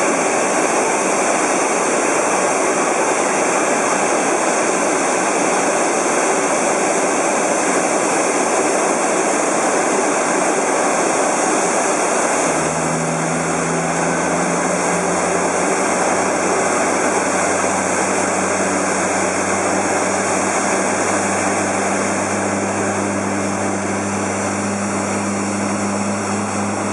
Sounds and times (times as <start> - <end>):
Engine: 0.0 - 26.9
Outside, urban or manmade: 0.0 - 26.9
Propeller, airscrew: 0.0 - 26.9.